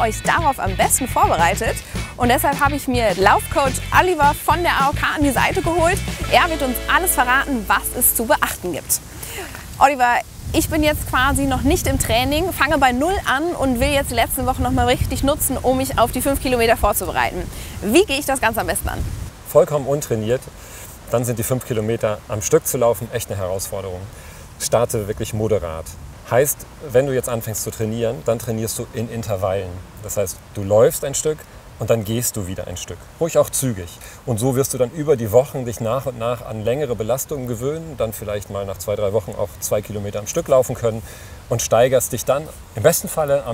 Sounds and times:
Speech: 0.0s - 20.5s, 21.1s - 43.5s
Outside, rural or natural: 0.0s - 43.5s.

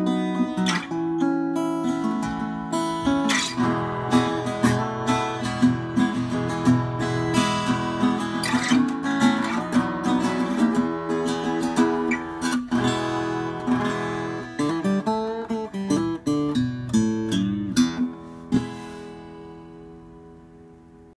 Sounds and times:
Strum: 0.0s - 21.0s
Acoustic guitar: 0.0s - 21.1s.

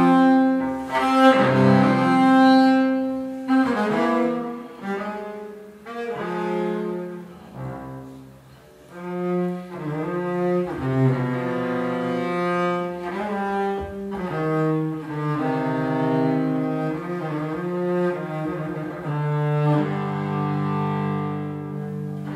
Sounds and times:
Bowed string instrument: 0.0s - 22.3s
Classical music: 0.0s - 22.3s.

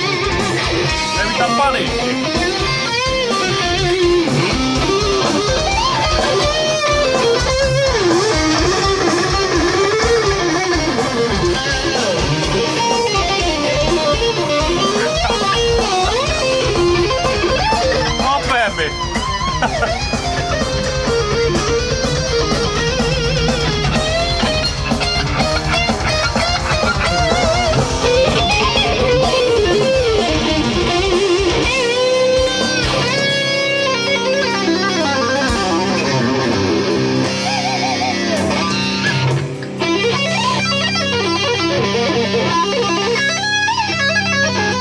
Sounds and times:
Electric guitar: 0.0s - 44.8s.

